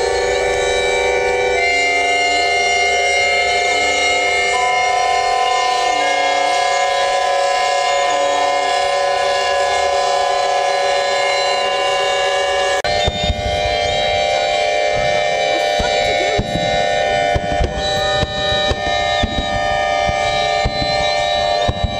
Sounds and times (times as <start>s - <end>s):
Siren: 0.0s - 21.9s.